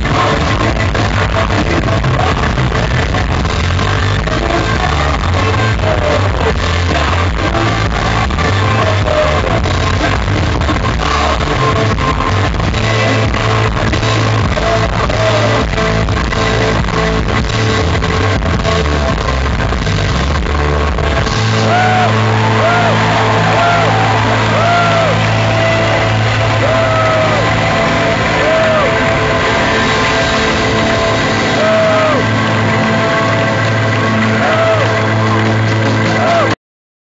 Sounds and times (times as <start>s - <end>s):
Music: 0.0s - 36.6s.